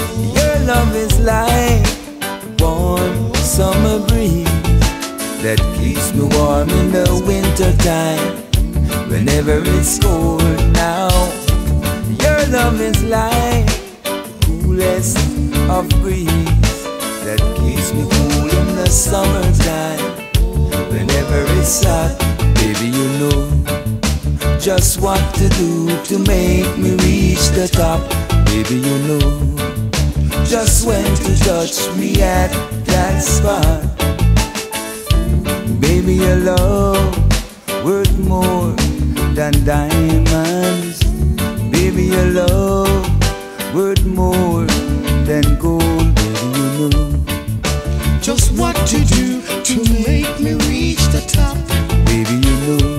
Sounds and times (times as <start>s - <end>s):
Singing: 0.0s - 2.0s, 2.6s - 4.7s, 5.4s - 16.4s, 17.2s - 23.5s, 24.6s - 29.5s, 30.5s - 33.9s, 37.8s - 43.1s, 48.2s - 52.9s
Music: 0.0s - 52.9s.